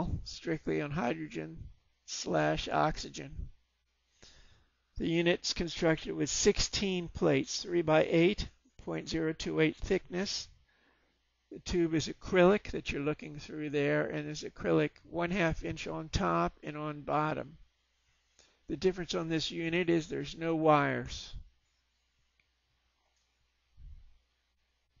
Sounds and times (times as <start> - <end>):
Speech: 0.0 - 3.5, 5.0 - 10.6, 11.5 - 17.6, 18.7 - 21.5.